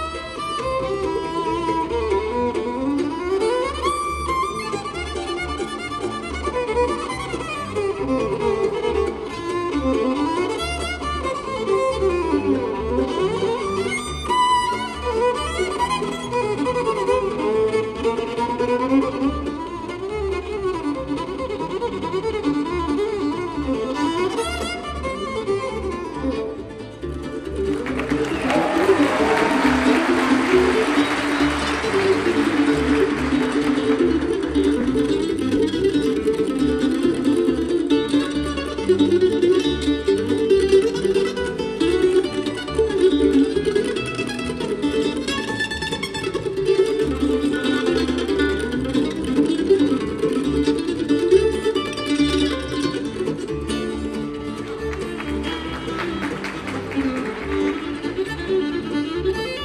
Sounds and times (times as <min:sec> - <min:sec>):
Bowed string instrument: 0:00.0 - 0:59.6.